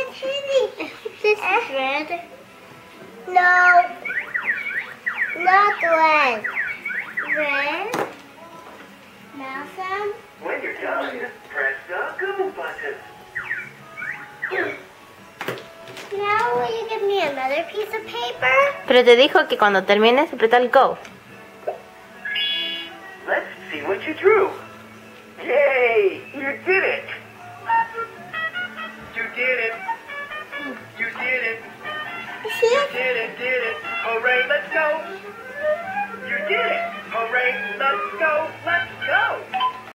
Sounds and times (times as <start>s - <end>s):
Child speech, kid speaking: 0.0s - 2.3s, 3.3s - 4.0s, 5.4s - 6.4s, 7.3s - 8.0s, 9.3s - 10.2s, 16.1s - 18.8s, 32.4s - 33.2s
Flute: 4.0s - 7.6s, 35.0s - 39.4s.